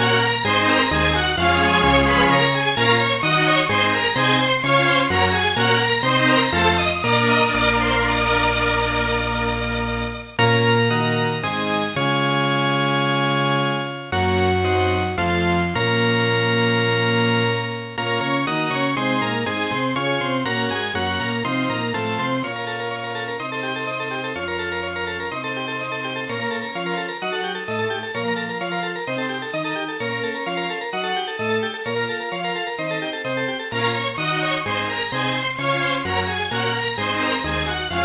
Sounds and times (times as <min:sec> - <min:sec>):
Music: 0:00.0 - 0:38.0.